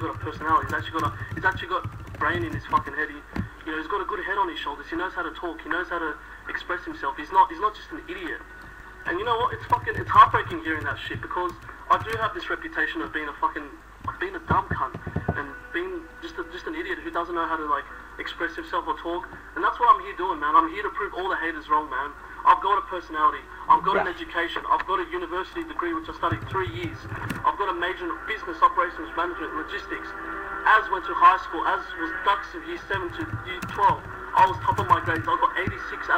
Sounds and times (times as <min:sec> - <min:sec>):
Male speech, man speaking: 0:00.0 - 0:08.5, 0:09.1 - 0:36.1.